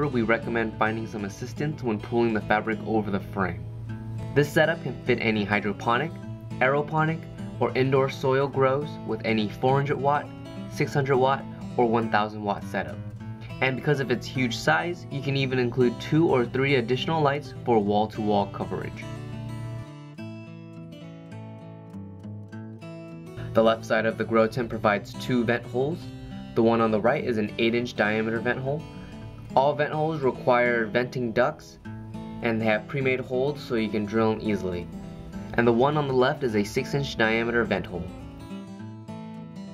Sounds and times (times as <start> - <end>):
Speech: 0.0 - 3.6, 4.4 - 13.0, 13.6 - 19.2, 23.5 - 28.9, 29.5 - 31.8, 32.4 - 34.9, 35.5 - 38.2
Music: 0.0 - 39.7.